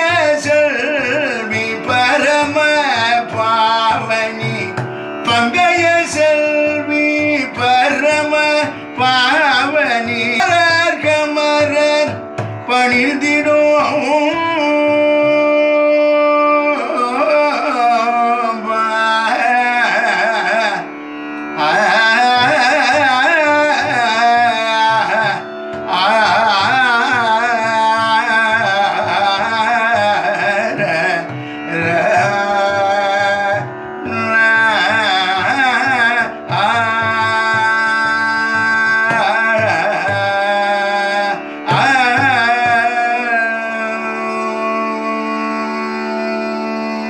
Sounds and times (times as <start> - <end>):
Tabla: 0.0 - 47.1.